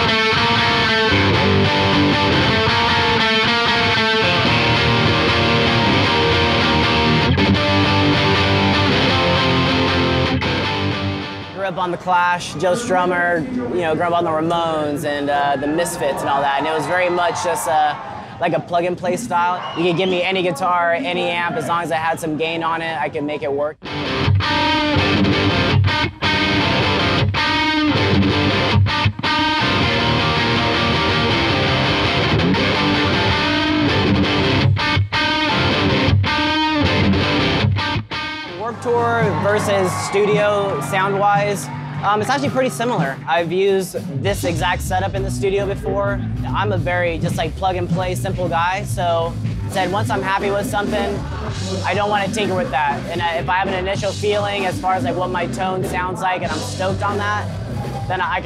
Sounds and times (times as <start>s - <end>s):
Music: 0.0s - 22.2s, 23.6s - 58.4s
Speech: 11.6s - 23.8s, 38.6s - 57.5s, 58.1s - 58.4s.